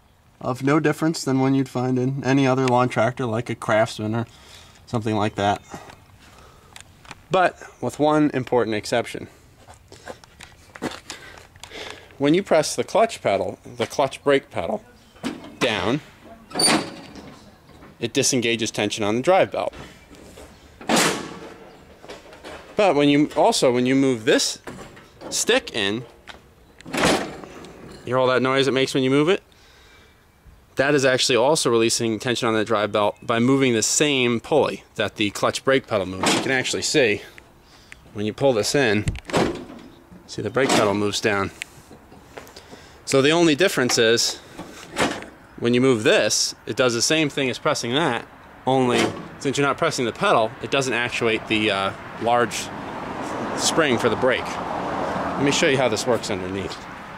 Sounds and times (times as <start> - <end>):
Speech: 0.4 - 4.3, 4.9 - 5.7, 7.3 - 9.3, 12.2 - 19.8, 22.8 - 24.6, 25.3 - 26.1, 28.0 - 29.4, 30.8 - 37.3, 38.1 - 39.1, 40.3 - 41.6, 43.1 - 44.4, 45.6 - 52.7, 53.6 - 54.6, 55.4 - 56.8.